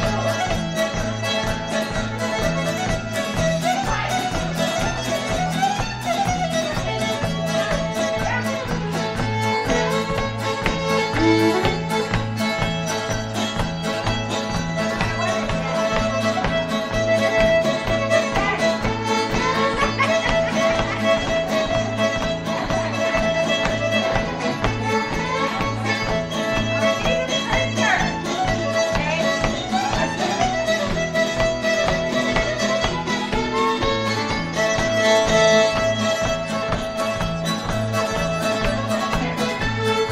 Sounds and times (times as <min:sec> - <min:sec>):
Violin, fiddle: 0:00.0 - 0:40.1.